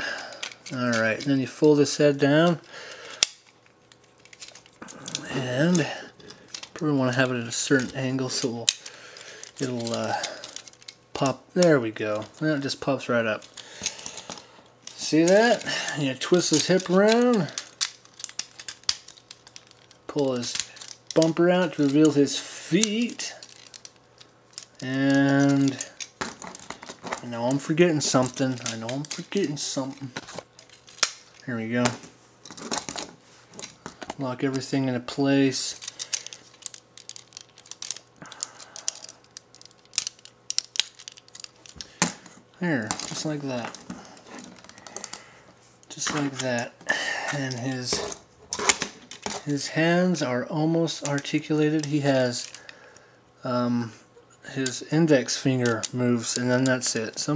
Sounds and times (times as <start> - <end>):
Inside, small room: 0.0 - 57.3.